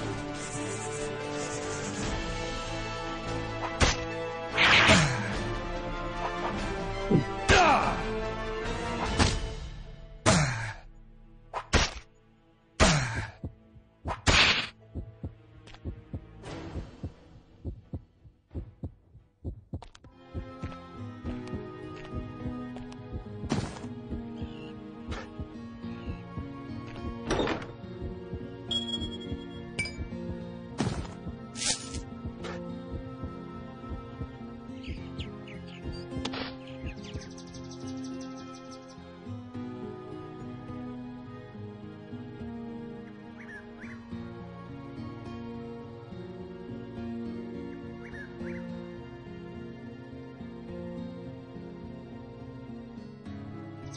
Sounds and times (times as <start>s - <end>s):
Music: 0.0s - 53.9s.